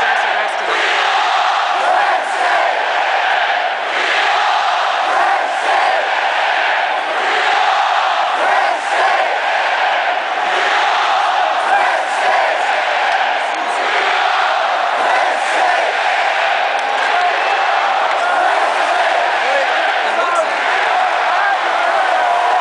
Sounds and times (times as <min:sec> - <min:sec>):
Crowd: 0:00.0 - 0:22.6
Speech: 0:11.5 - 0:14.2, 0:16.8 - 0:22.6.